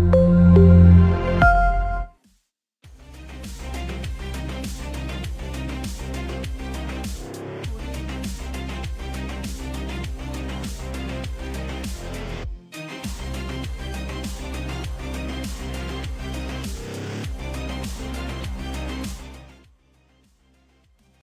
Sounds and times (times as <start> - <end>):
Music: 0.0 - 21.2.